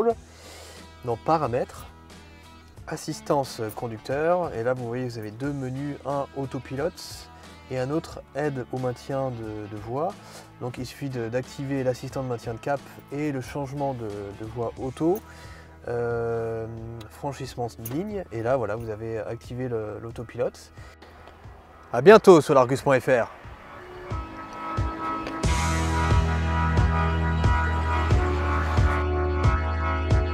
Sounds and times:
Speech: 0.0 - 0.2, 1.0 - 1.9, 2.9 - 15.2, 15.8 - 20.7, 21.9 - 23.3
Music: 0.0 - 30.3.

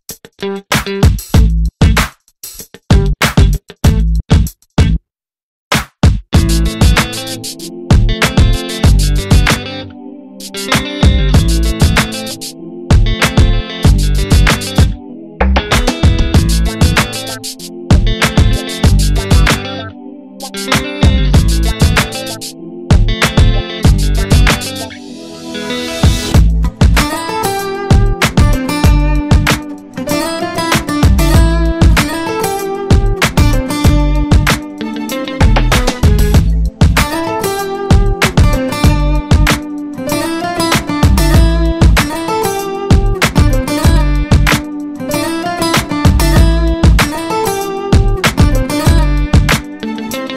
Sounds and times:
Music: 0.1 - 5.0, 5.8 - 50.3.

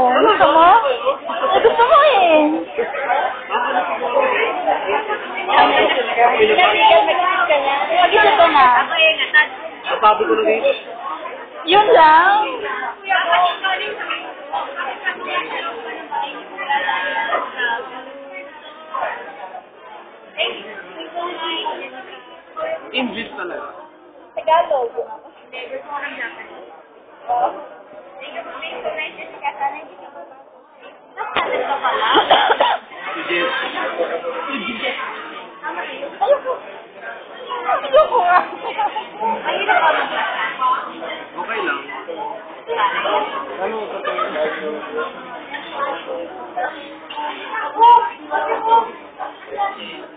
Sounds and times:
Inside, large room or hall: 0.0 - 50.1.

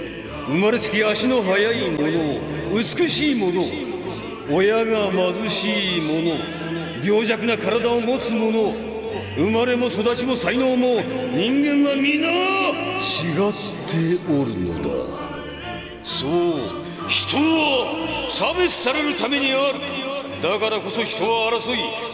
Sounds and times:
Male speech, man speaking: 0.0 - 15.4, 16.0 - 22.1
Music: 0.0 - 22.1
Narration, monologue: 0.0 - 22.1.

